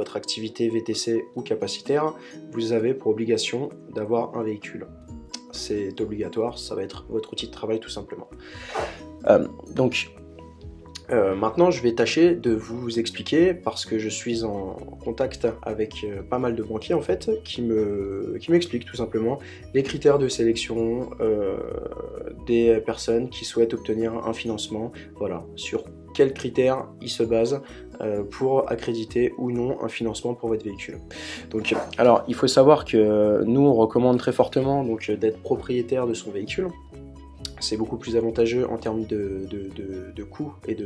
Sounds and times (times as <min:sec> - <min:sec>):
Speech: 0:00.0 - 0:08.3, 0:09.2 - 0:10.1, 0:11.0 - 0:36.8, 0:37.5 - 0:40.8
Music: 0:00.0 - 0:40.8.